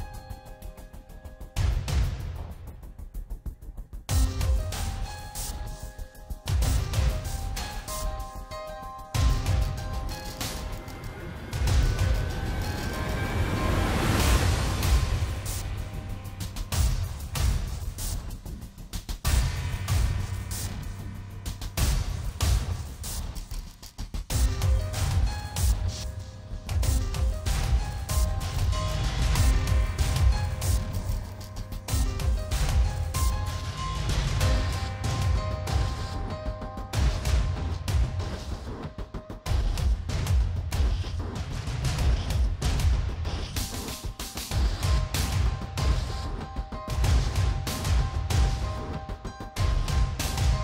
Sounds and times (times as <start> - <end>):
Music: 0.0 - 50.6.